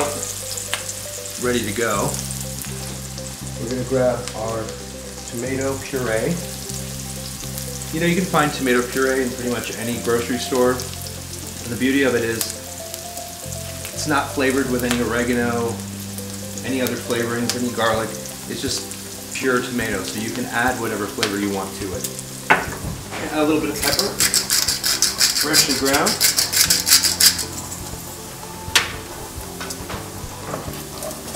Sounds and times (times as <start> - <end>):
Music: 0.0 - 31.3
Speech: 1.4 - 2.2, 3.6 - 6.4, 8.0 - 10.9, 11.7 - 12.5, 14.0 - 15.8, 16.6 - 18.8, 19.4 - 22.0, 23.2 - 24.2, 25.4 - 26.2.